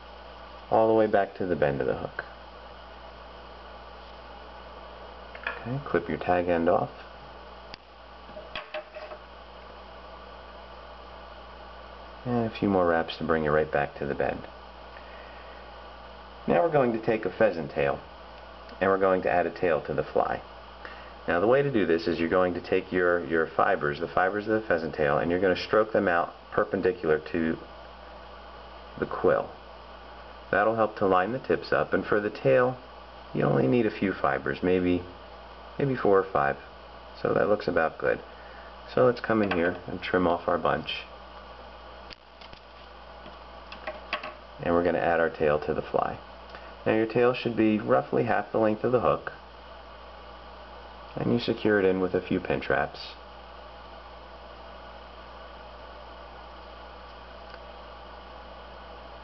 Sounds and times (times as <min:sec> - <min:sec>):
Speech: 0:00.7 - 0:02.3, 0:05.5 - 0:07.1, 0:12.2 - 0:14.5, 0:16.4 - 0:18.1, 0:18.8 - 0:20.5, 0:21.3 - 0:27.7, 0:29.0 - 0:29.6, 0:30.5 - 0:35.2, 0:35.8 - 0:38.2, 0:38.9 - 0:41.1, 0:44.6 - 0:46.2, 0:46.8 - 0:49.4, 0:51.1 - 0:53.2.